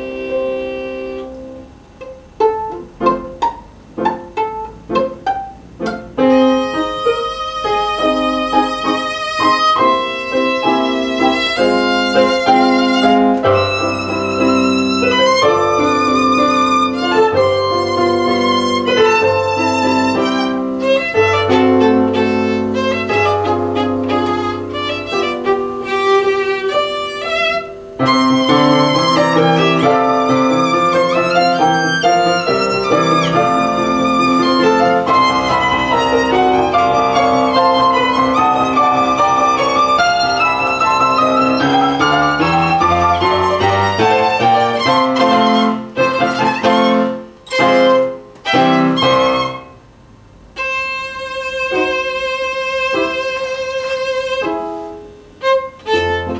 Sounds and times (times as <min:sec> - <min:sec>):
Violin, fiddle: 0:00.0 - 0:49.8, 0:50.6 - 0:56.3.